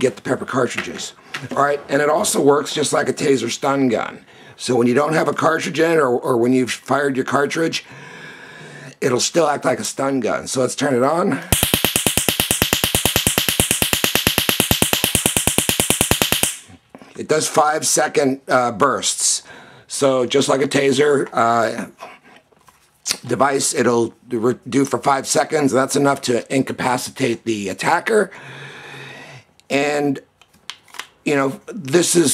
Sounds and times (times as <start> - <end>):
Speech: 0.0 - 7.9, 9.0 - 11.4, 17.2 - 22.0, 23.0 - 28.3, 29.7 - 30.3, 31.2 - 32.3.